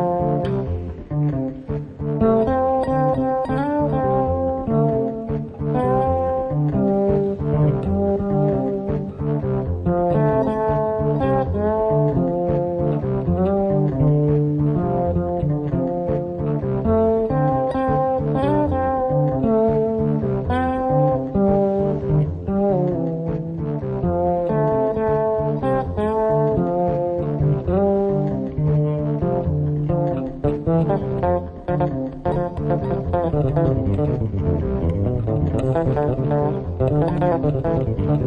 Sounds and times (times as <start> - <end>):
Bass guitar: 0.0 - 38.2.